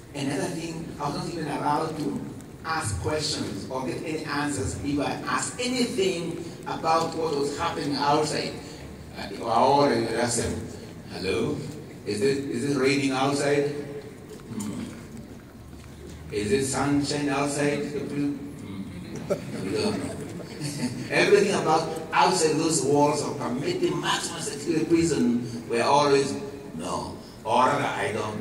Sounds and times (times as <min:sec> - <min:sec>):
Male speech, man speaking: 0:00.1 - 0:14.9, 0:16.3 - 0:18.8, 0:19.6 - 0:28.4.